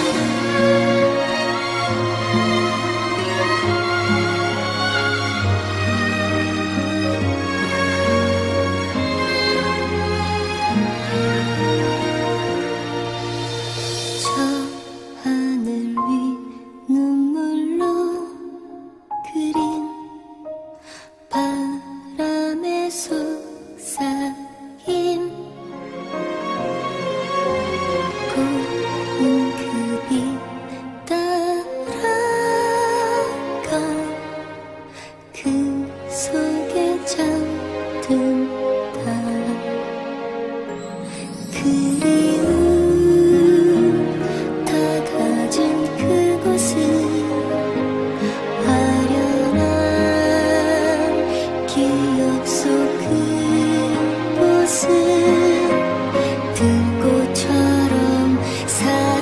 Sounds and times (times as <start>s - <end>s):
Music: 0.0s - 59.2s.